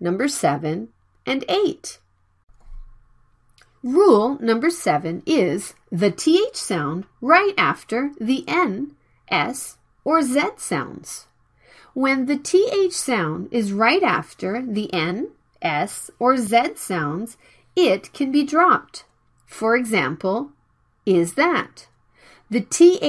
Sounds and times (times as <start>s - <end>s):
Speech: 0.0s - 2.0s, 3.8s - 11.3s, 12.0s - 20.5s, 21.1s - 21.9s, 22.5s - 23.0s.